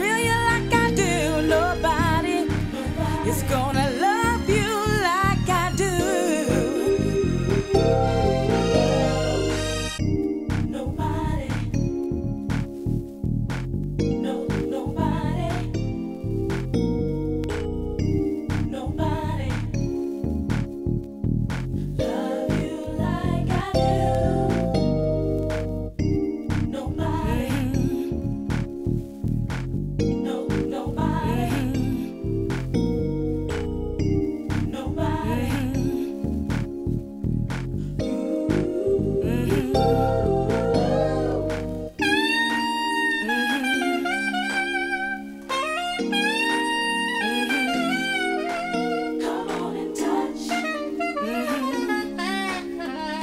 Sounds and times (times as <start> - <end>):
Saxophone: 0.2 - 10.2, 38.9 - 53.2.